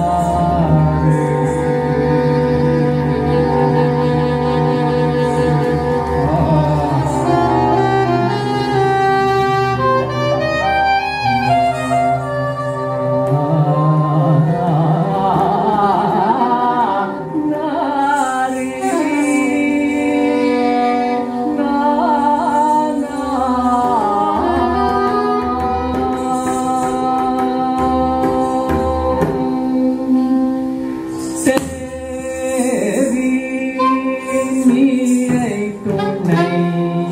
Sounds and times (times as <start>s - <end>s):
Vocal music: 0.0s - 37.1s
Singing: 11.3s - 37.1s.